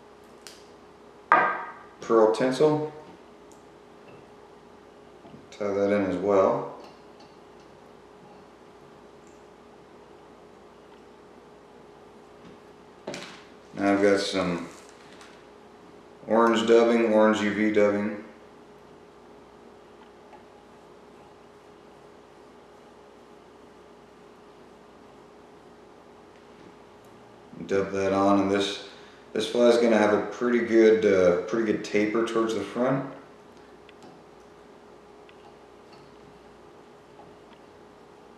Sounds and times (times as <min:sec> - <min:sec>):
Speech: 0:02.0 - 0:03.0, 0:05.5 - 0:06.8, 0:13.8 - 0:14.8, 0:16.2 - 0:18.3, 0:27.6 - 0:33.2.